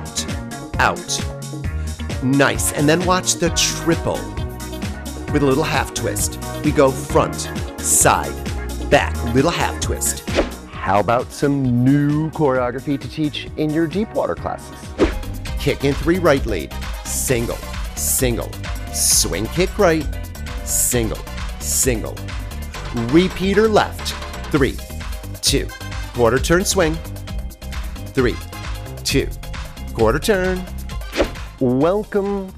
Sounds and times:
Speech: 0.0 - 1.3, 2.2 - 4.4, 5.3 - 10.2, 10.8 - 14.8, 15.6 - 20.1, 20.7 - 22.2, 22.9 - 24.8, 25.4 - 27.0, 28.2 - 28.4, 29.0 - 29.4, 30.0 - 30.7, 31.6 - 32.5
Music: 0.0 - 32.5.

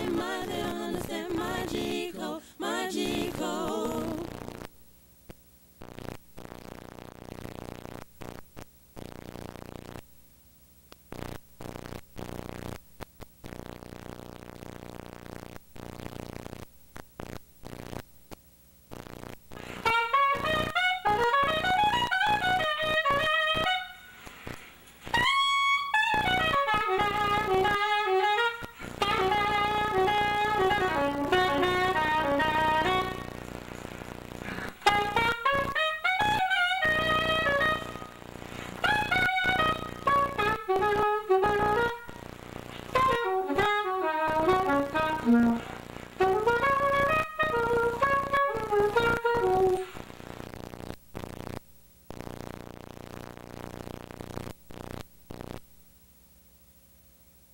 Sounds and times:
Clarinet: 19.7 - 24.2, 25.0 - 33.4, 34.5 - 38.2, 38.8 - 42.2, 42.9 - 50.0.

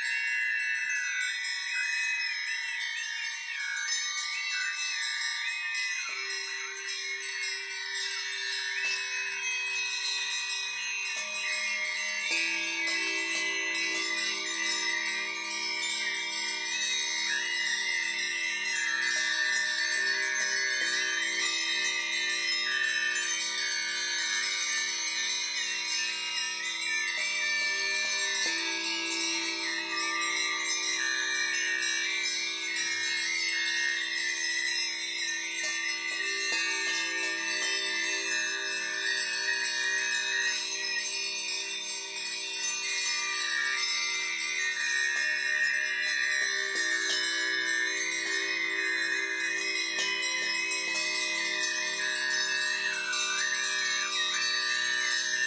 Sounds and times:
Wind chime: 0.0 - 55.4.

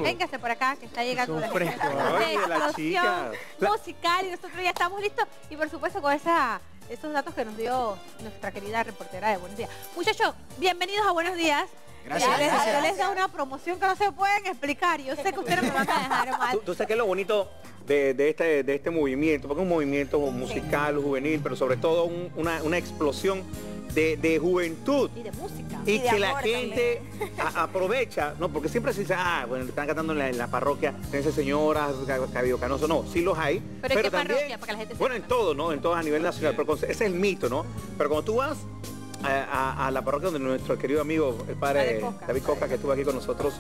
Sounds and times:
Music: 0.0 - 43.6.

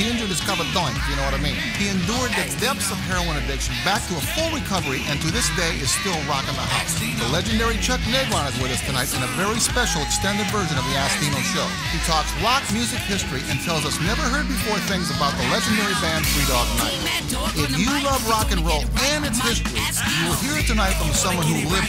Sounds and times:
Music: 0.0 - 21.8
Speech: 0.0 - 21.8.

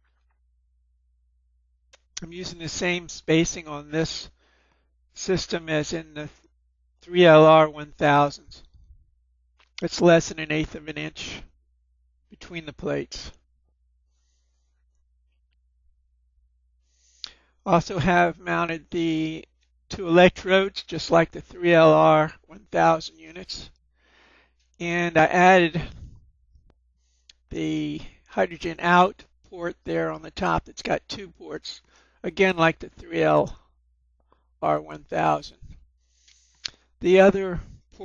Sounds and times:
Speech: 2.2 - 4.4, 5.2 - 6.4, 7.1 - 8.7, 9.8 - 11.5, 12.4 - 13.4, 17.7 - 23.7, 24.8 - 26.1, 27.5 - 33.6, 34.6 - 35.7, 37.0 - 38.0.

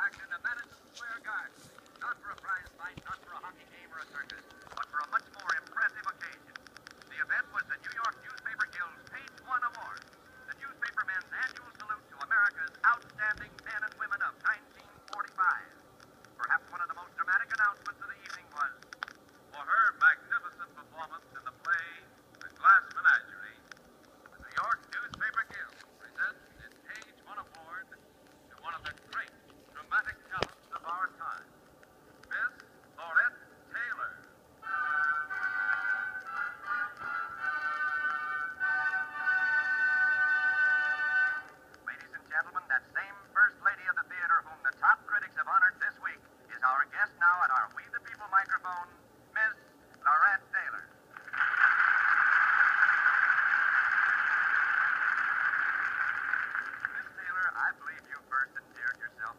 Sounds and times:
Speech: 0.0 - 15.8, 16.4 - 18.8, 19.5 - 23.7, 24.4 - 31.5, 32.3 - 34.3, 41.9 - 51.0, 56.9 - 59.3.

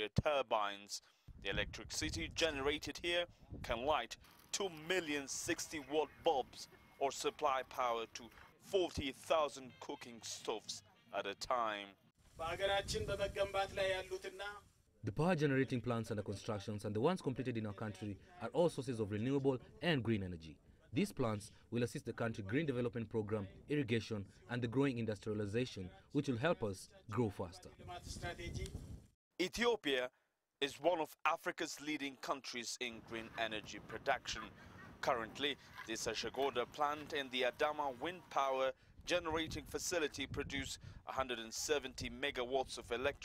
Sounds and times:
Speech: 0.0 - 28.7, 29.4 - 43.2.

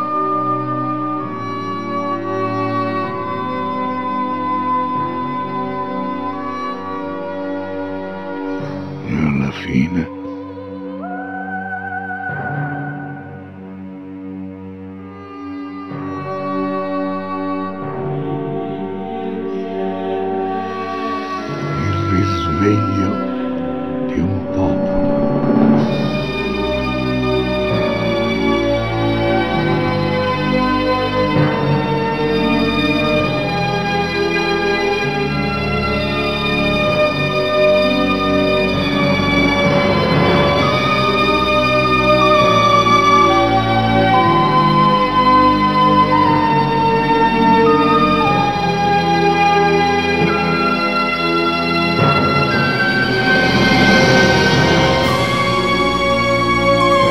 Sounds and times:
Music: 0.0 - 57.1
Speech: 9.0 - 10.3, 21.8 - 23.3, 24.1 - 25.2.

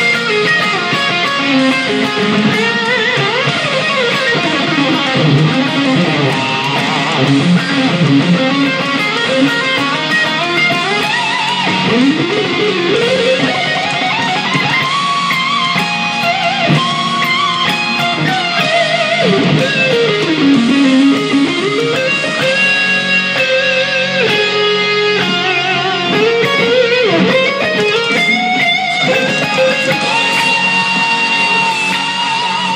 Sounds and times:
Bass guitar: 0.0 - 32.7.

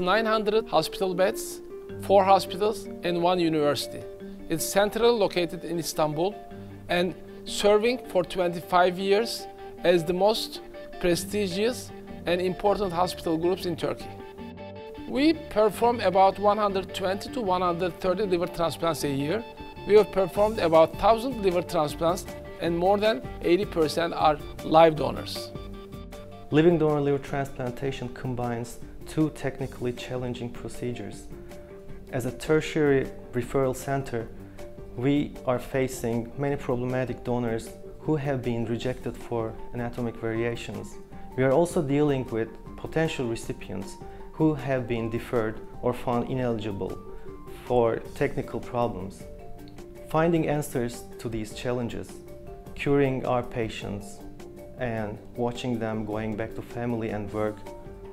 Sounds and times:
Speech: 0.0 - 14.1, 15.1 - 25.6, 26.5 - 31.3, 32.1 - 34.3, 35.0 - 49.3, 50.1 - 52.2, 52.8 - 54.2, 54.8 - 57.7
Music: 0.0 - 58.1.

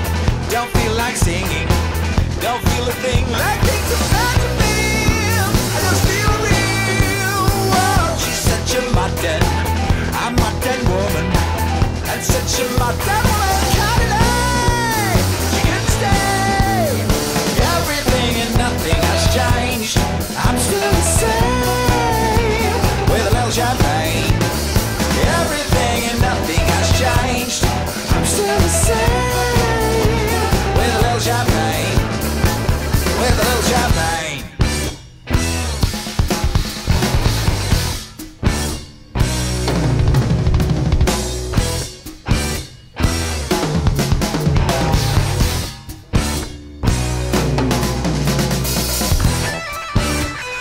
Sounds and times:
Rock music: 0.0 - 50.6.

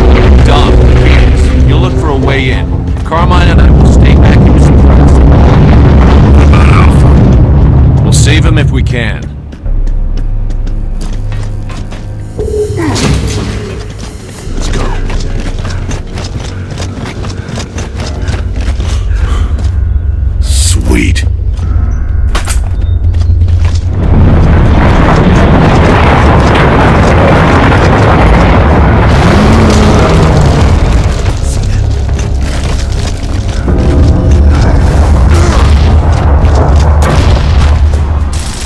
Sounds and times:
Speech: 8.0 - 9.3, 20.4 - 21.3
Music: 8.9 - 23.9.

